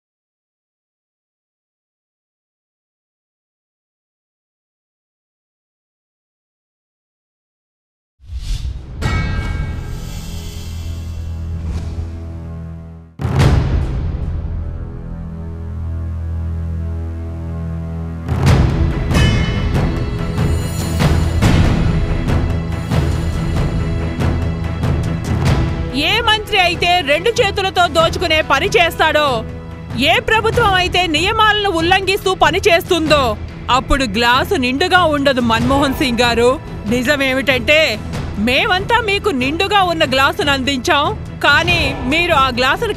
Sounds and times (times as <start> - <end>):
Music: 8.2 - 42.9
Narration, monologue: 19.8 - 42.9
Female speech, woman speaking: 25.9 - 42.9.